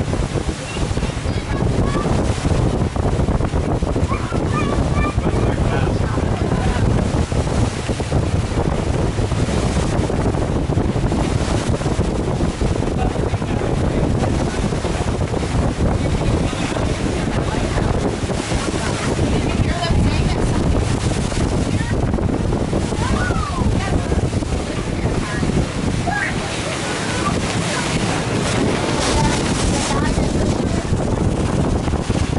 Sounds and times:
Outside, rural or natural: 0:00.0 - 0:32.3
Ship: 0:00.0 - 0:32.3.

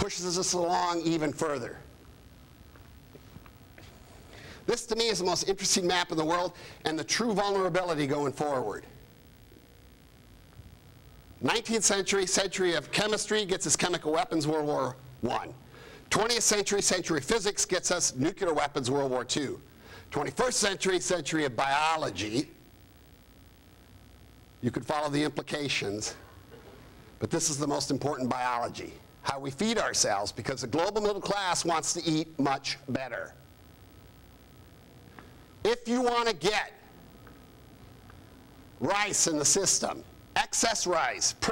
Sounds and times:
Male speech, man speaking: 0:00.0 - 0:01.9, 0:04.7 - 0:08.9, 0:11.4 - 0:22.6, 0:24.6 - 0:26.2, 0:27.2 - 0:33.4, 0:35.6 - 0:36.9, 0:38.8 - 0:41.5.

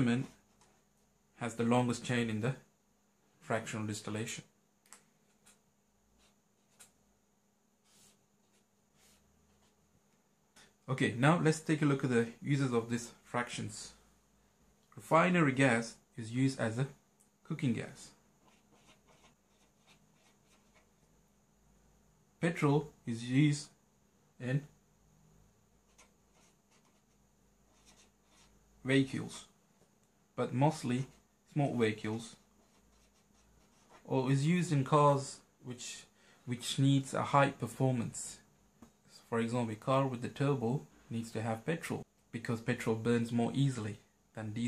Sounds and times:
Speech: 0:00.0 - 0:00.4, 0:01.4 - 0:02.7, 0:03.4 - 0:04.6, 0:10.8 - 0:14.0, 0:14.9 - 0:18.2, 0:22.4 - 0:23.8, 0:24.4 - 0:24.8, 0:28.8 - 0:29.5, 0:30.4 - 0:32.4, 0:34.0 - 0:38.5, 0:39.1 - 0:44.6.

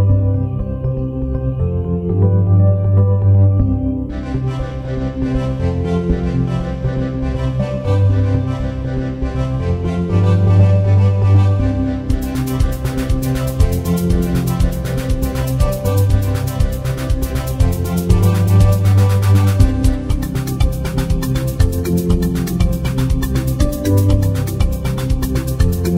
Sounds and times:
Music: 0:00.0 - 0:25.9.

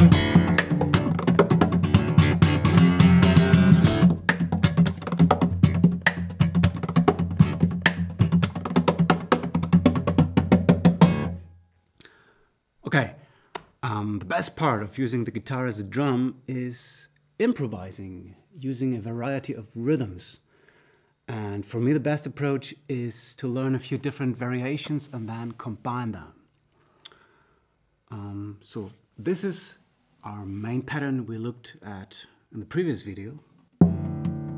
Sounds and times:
Speech: 0:12.8 - 0:13.2, 0:13.8 - 0:20.4, 0:21.3 - 0:26.4, 0:28.1 - 0:33.5.

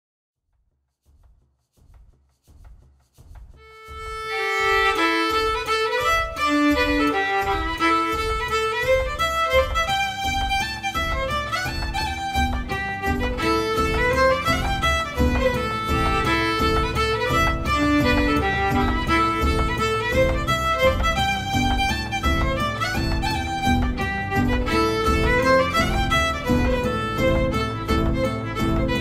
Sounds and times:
Violin, fiddle: 0:03.6 - 0:29.0.

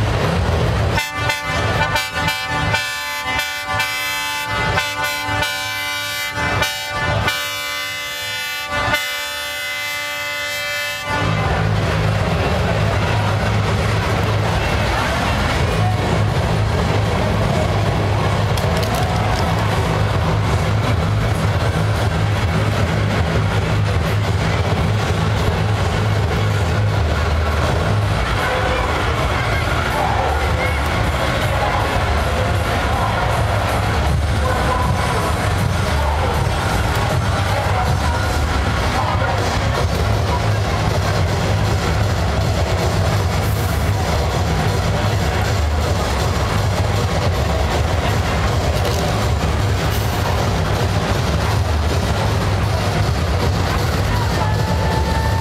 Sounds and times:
Music: 0:11.5 - 0:55.4.

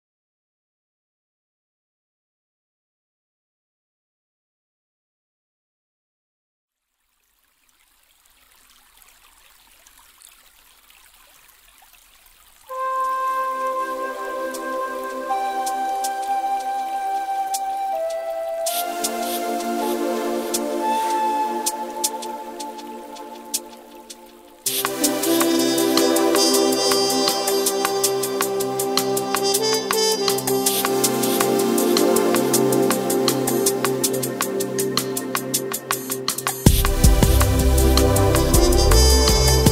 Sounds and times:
Drum and bass: 0:24.7 - 0:39.7.

